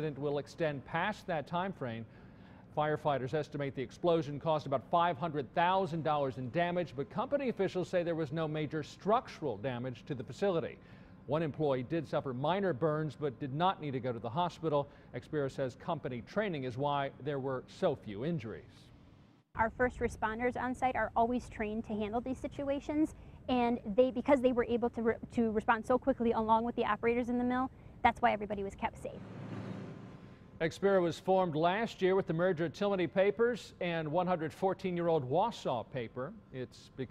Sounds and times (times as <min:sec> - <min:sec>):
Speech: 0:00.0 - 0:02.1, 0:02.8 - 0:18.8, 0:19.6 - 0:29.2, 0:30.6 - 0:37.1.